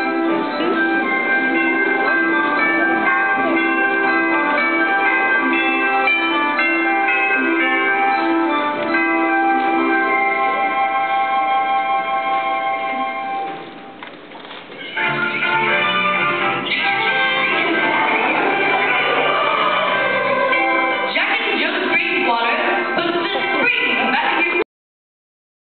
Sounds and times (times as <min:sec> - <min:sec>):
Music: 0:00.0 - 0:14.0, 0:14.7 - 0:24.6
Speech: 0:21.1 - 0:24.7.